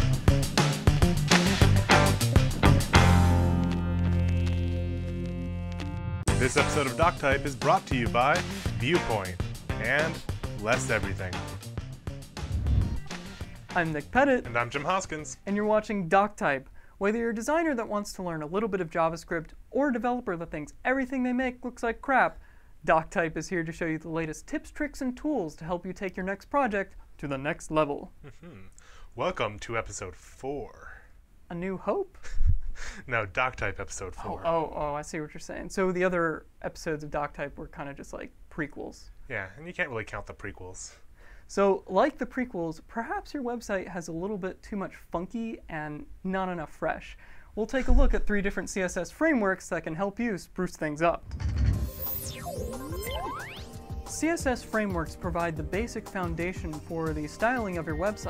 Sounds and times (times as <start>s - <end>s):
Music: 0.0s - 15.7s, 51.4s - 58.3s
Speech: 6.4s - 11.5s, 13.7s - 32.1s, 33.1s - 51.2s, 54.1s - 58.3s.